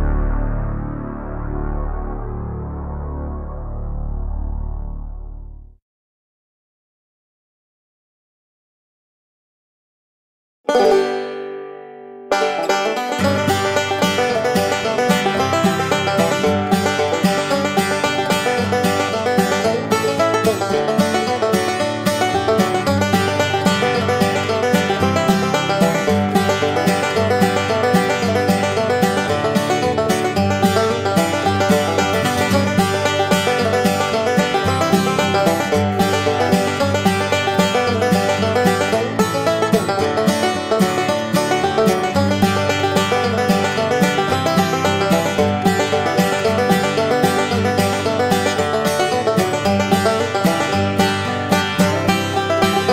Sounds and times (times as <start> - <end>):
Music: 0.0 - 5.8, 10.7 - 52.9.